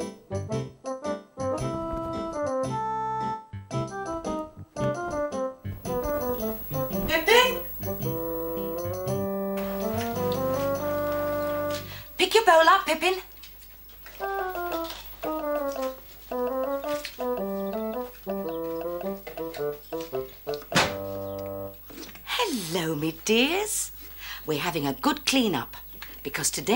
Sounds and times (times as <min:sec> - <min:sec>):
Music: 0:00.0 - 0:12.2, 0:14.1 - 0:21.8
Speech: 0:07.0 - 0:07.6, 0:12.2 - 0:13.3, 0:22.3 - 0:23.9, 0:24.5 - 0:26.7.